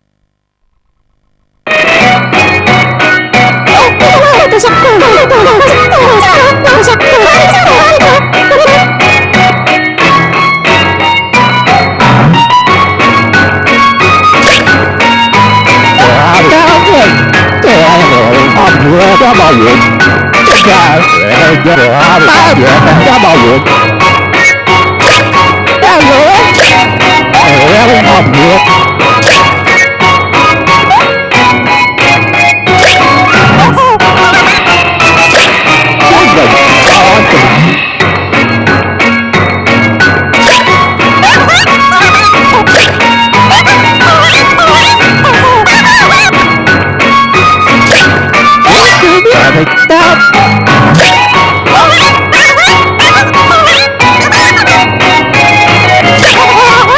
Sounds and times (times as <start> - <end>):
Music: 1.6 - 56.9.